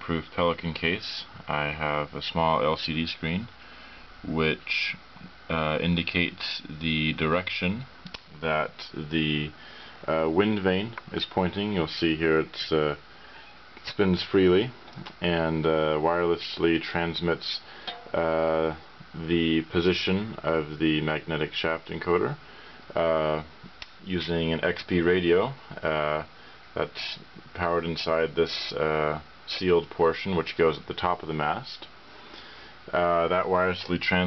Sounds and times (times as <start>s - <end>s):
Speech: 0.0s - 3.6s, 4.2s - 13.0s, 13.8s - 32.0s, 32.9s - 34.2s.